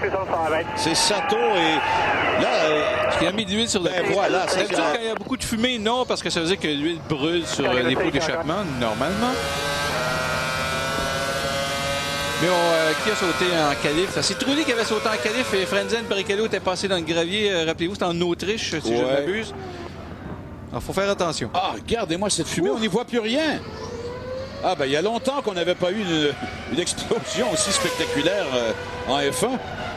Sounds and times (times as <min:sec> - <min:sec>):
Car: 0:00.0 - 0:29.9
Engine: 0:06.3 - 0:29.9.